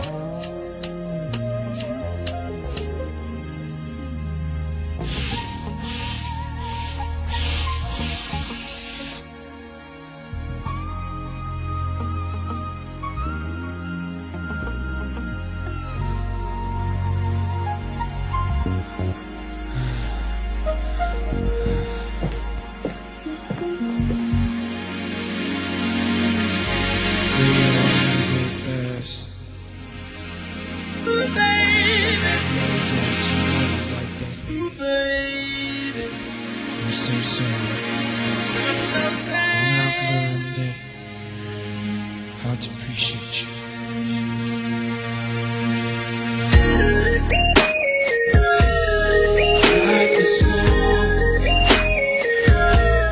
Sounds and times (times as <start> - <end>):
Music: 0.0 - 53.1.